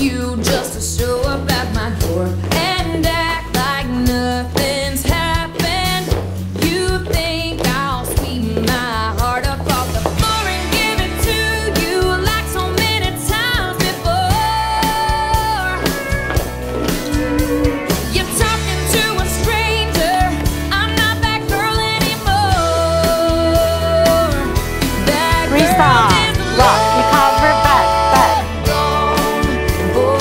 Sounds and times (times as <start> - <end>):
Music: 0.0 - 30.2.